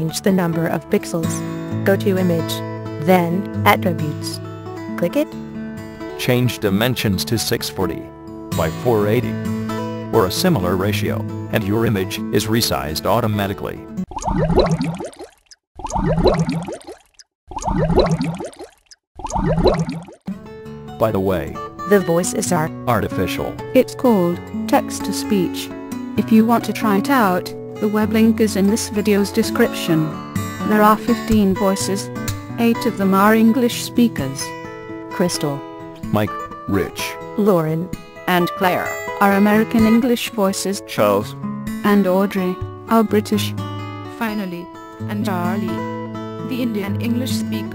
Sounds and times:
Speech: 0.0s - 4.4s, 5.0s - 5.3s, 6.2s - 9.4s, 10.2s - 13.8s, 21.0s - 34.5s, 35.2s - 43.6s, 44.2s - 45.8s, 46.5s - 47.7s
Music: 0.0s - 14.1s, 20.3s - 47.7s.

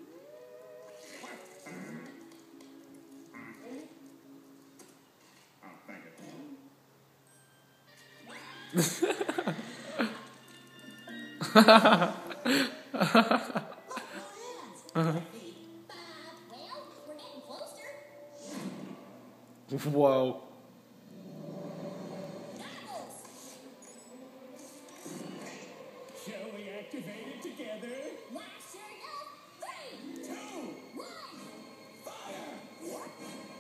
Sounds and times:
Music: 0.0s - 19.9s, 20.6s - 33.6s.

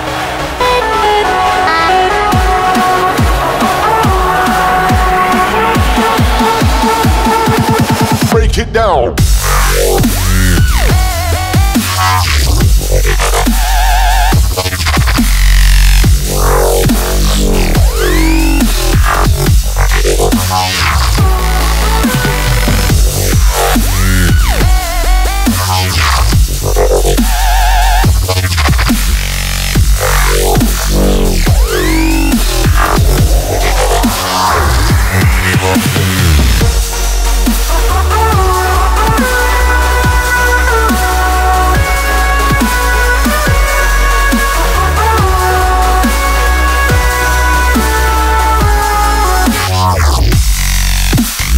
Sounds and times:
Dubstep: 0.0s - 51.5s.

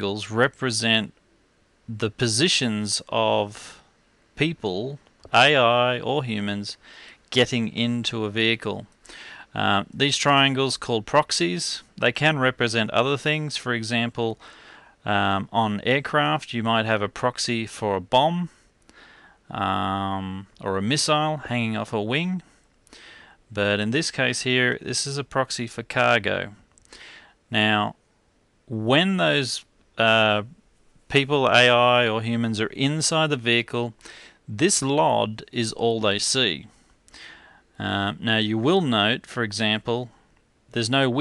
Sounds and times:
Speech: 0.0s - 1.2s, 1.9s - 3.8s, 4.4s - 8.9s, 9.5s - 14.4s, 15.0s - 18.6s, 19.5s - 22.5s, 23.5s - 26.6s, 27.5s - 28.0s, 28.7s - 36.8s, 37.8s - 41.2s.

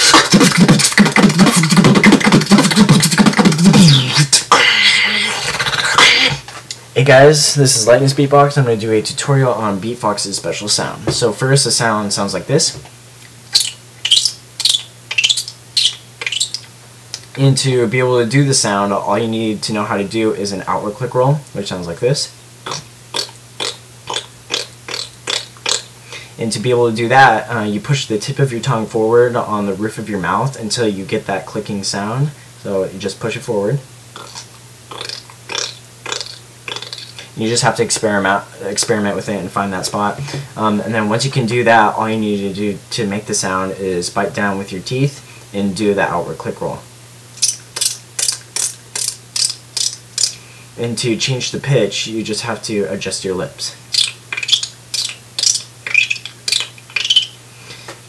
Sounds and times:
Speech: 7.0s - 12.9s, 17.4s - 22.4s, 26.4s - 33.9s, 37.4s - 46.9s, 50.8s - 53.8s.

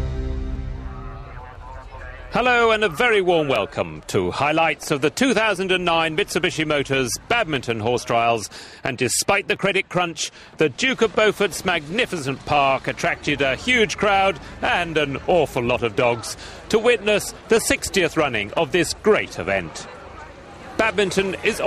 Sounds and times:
Speech: 1.2s - 21.6s.

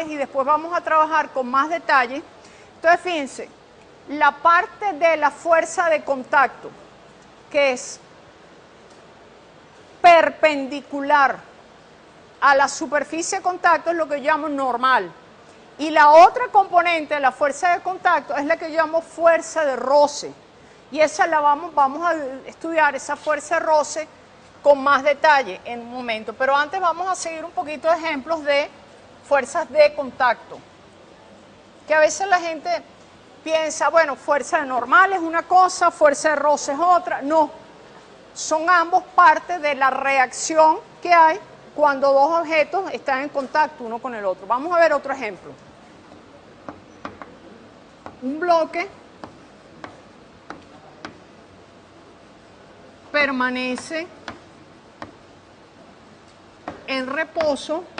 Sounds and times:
Speech: 15.8s - 30.6s, 31.9s - 37.6s, 38.4s - 45.6s, 48.2s - 49.0s, 53.1s - 54.1s, 56.9s - 57.9s.

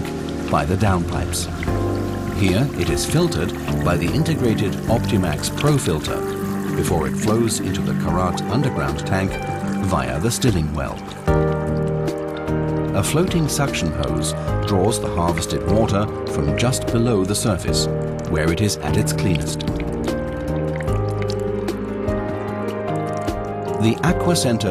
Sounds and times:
Music: 0.0s - 24.7s
Speech: 0.5s - 1.5s, 2.4s - 11.1s, 12.9s - 19.6s, 23.8s - 24.7s.

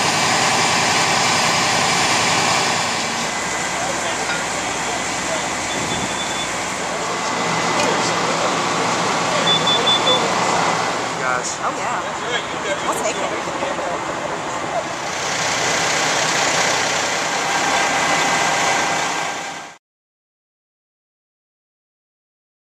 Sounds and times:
Alarm: 5.3s - 6.6s, 9.4s - 10.3s
Speech: 11.2s - 14.0s.

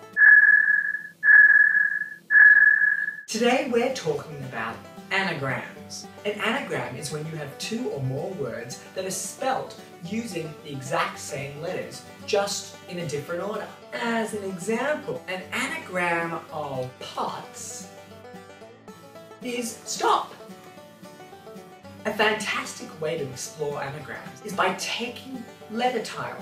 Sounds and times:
Music: 0.0s - 0.2s, 3.3s - 26.4s
Speech: 3.3s - 17.9s, 19.4s - 20.4s, 22.1s - 26.4s.

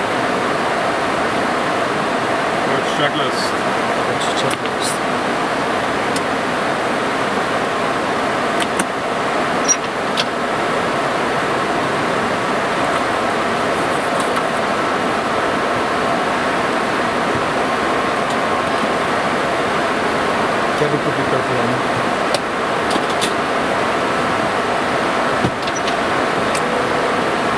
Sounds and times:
Aircraft: 0.0s - 27.5s.

